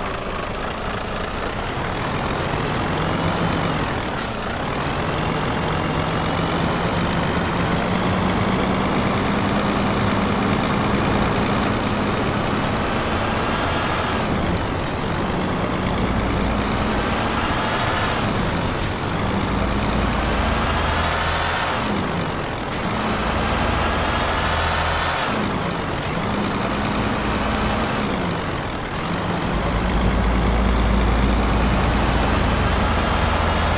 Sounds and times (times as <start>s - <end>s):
Truck: 0.0s - 33.7s.